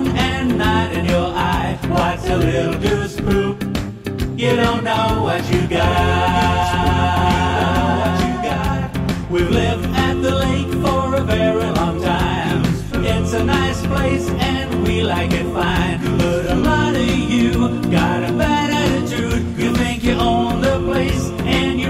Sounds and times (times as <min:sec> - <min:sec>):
Music: 0:00.0 - 0:21.8.